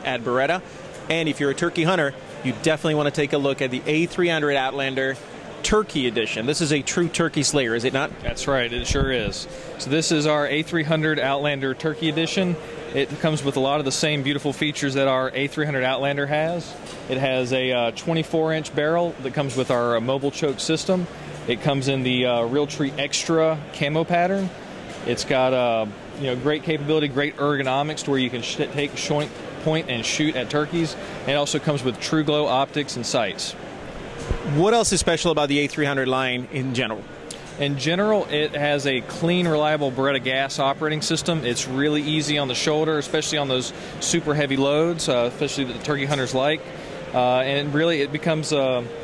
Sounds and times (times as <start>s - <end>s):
Speech: 0.0s - 33.6s, 34.5s - 37.0s, 37.6s - 48.9s.